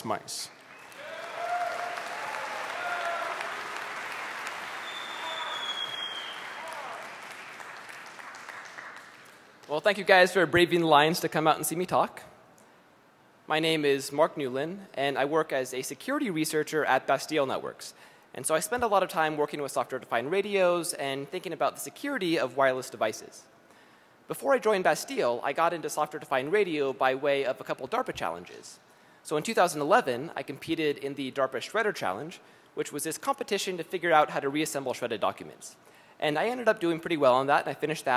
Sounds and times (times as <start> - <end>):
Speech: 0.0 - 0.5, 9.7 - 12.3, 13.5 - 23.5, 24.3 - 38.1.